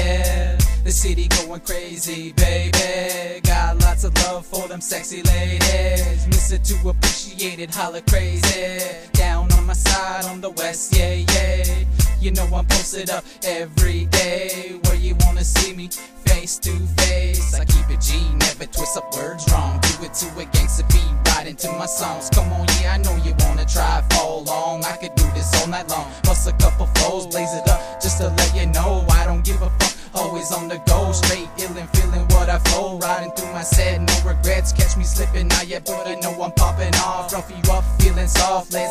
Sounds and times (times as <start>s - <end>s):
Music: 0.0s - 38.9s.